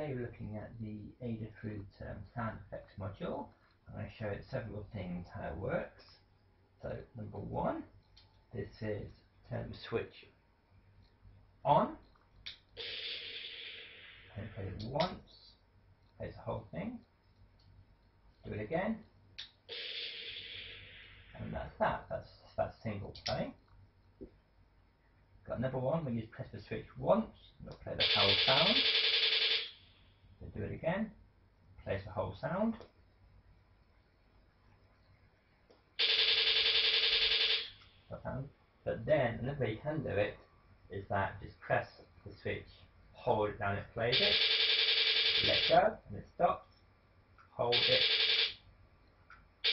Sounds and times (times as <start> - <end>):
Speech: 0.0 - 6.2, 6.8 - 7.9, 8.5 - 10.4, 11.6 - 12.0, 14.4 - 15.6, 16.2 - 17.0, 18.4 - 19.0, 21.4 - 23.6, 25.4 - 28.8, 30.4 - 31.2, 31.8 - 32.8, 38.1 - 44.3, 45.4 - 46.6, 47.5 - 48.0.